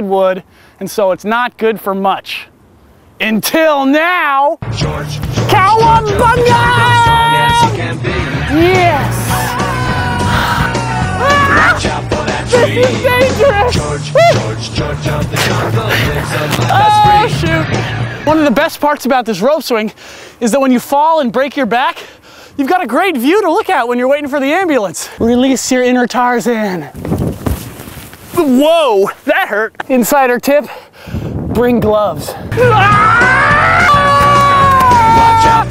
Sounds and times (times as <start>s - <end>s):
Speech: 0.0s - 2.5s, 3.2s - 4.6s, 5.5s - 7.7s, 8.5s - 9.3s, 18.3s - 22.0s, 22.6s - 27.0s, 28.4s - 30.8s, 31.5s - 32.4s.